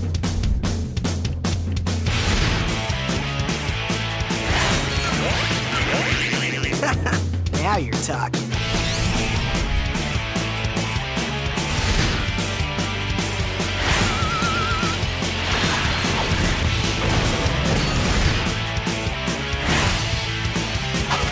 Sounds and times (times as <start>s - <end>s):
Music: 0.0s - 21.3s
Speech: 6.3s - 8.5s.